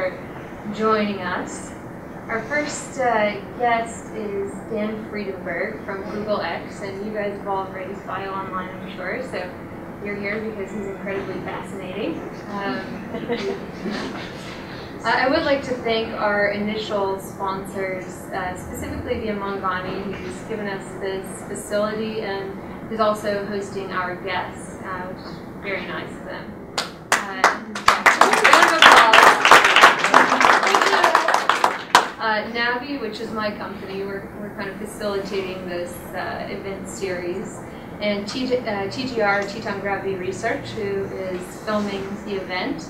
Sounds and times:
Speech: 2.3s - 26.5s, 27.2s - 31.4s, 32.2s - 42.8s.

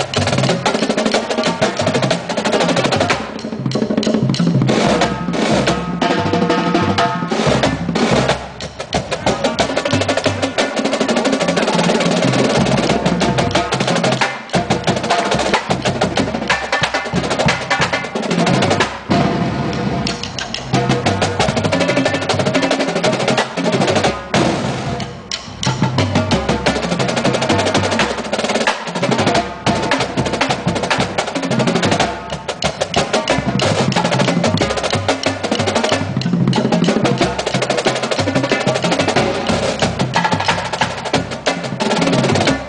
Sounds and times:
Drum kit: 0.0s - 42.6s
Drum roll: 0.0s - 42.6s.

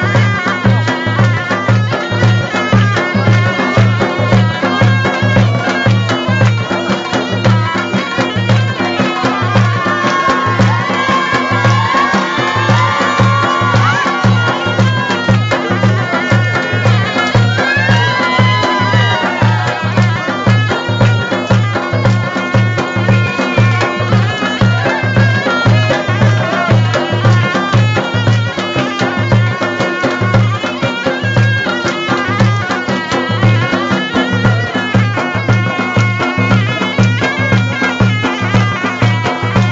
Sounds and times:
Music: 0.0s - 39.7s.

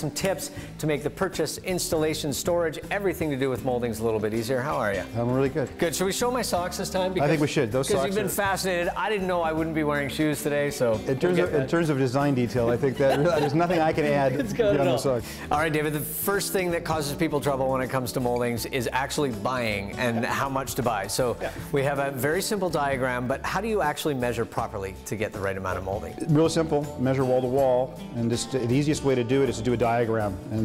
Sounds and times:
Music: 0.0s - 30.6s
Speech: 0.0s - 30.6s.

